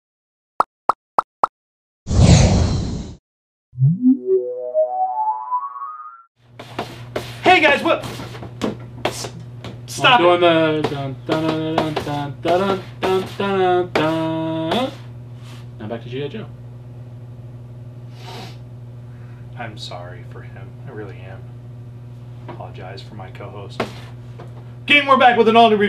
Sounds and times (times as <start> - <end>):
Speech: 7.4 - 8.0, 9.9 - 15.0, 15.8 - 16.5, 19.6 - 21.4, 22.5 - 23.8, 24.9 - 25.8.